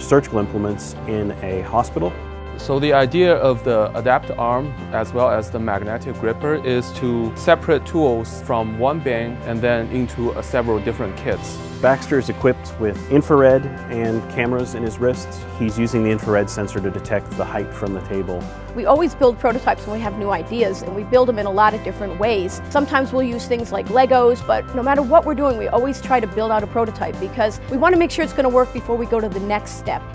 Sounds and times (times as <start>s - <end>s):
Speech: 0.0s - 30.0s
Music: 0.0s - 30.1s.